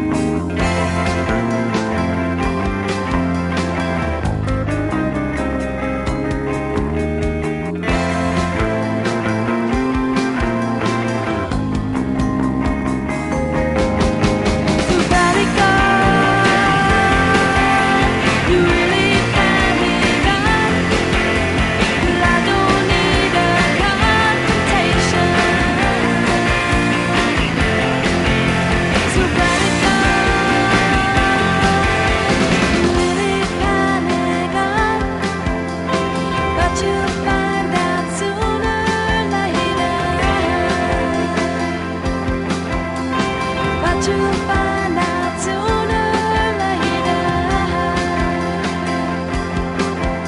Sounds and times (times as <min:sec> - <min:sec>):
Grunge: 0:00.0 - 0:50.2.